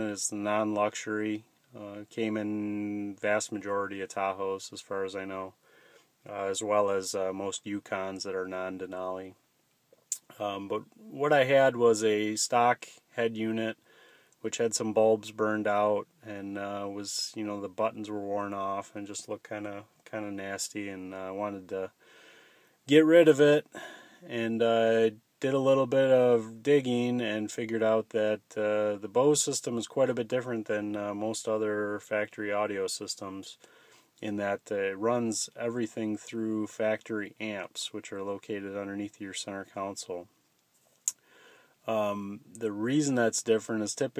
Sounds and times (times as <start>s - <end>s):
Speech: 0.0s - 5.6s, 6.3s - 9.4s, 10.1s - 13.8s, 14.4s - 21.9s, 22.9s - 23.7s, 24.3s - 33.6s, 34.2s - 40.3s, 41.9s - 44.1s.